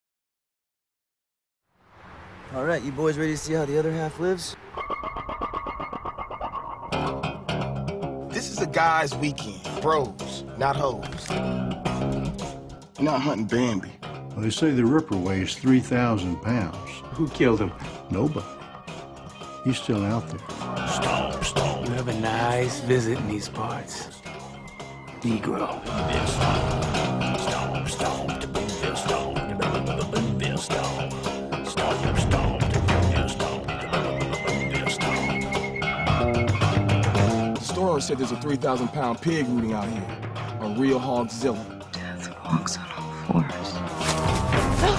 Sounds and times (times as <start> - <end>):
Music: 6.7 - 44.9.